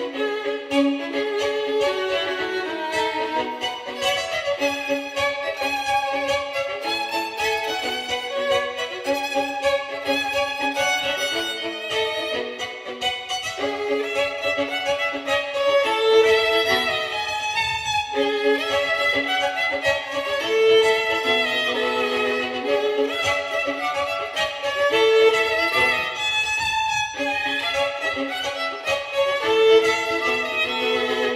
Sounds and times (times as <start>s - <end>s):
Violin, fiddle: 0.0s - 31.3s.